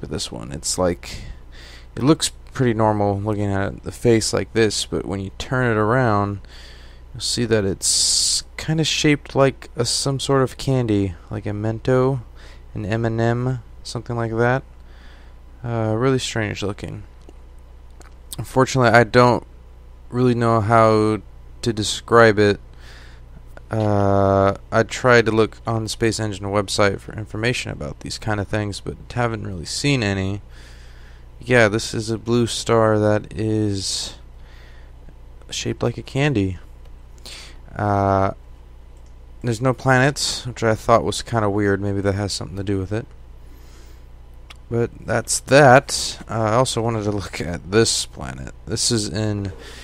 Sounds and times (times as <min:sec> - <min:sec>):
Speech: 0:00.0 - 0:01.4, 0:02.0 - 0:06.4, 0:07.1 - 0:14.7, 0:15.6 - 0:17.1, 0:18.3 - 0:19.5, 0:20.1 - 0:22.6, 0:23.6 - 0:30.4, 0:31.4 - 0:34.2, 0:35.5 - 0:36.7, 0:37.7 - 0:38.4, 0:39.4 - 0:43.1, 0:44.7 - 0:49.6.